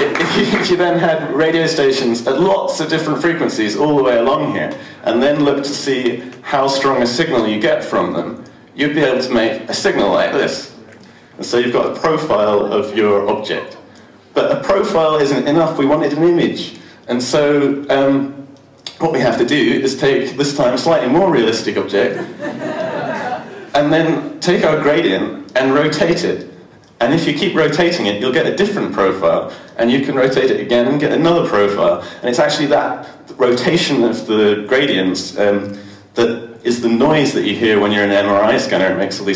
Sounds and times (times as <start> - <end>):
Male speech, man speaking: 0.0 - 10.8, 11.4 - 13.8, 14.4 - 22.2, 23.7 - 39.3.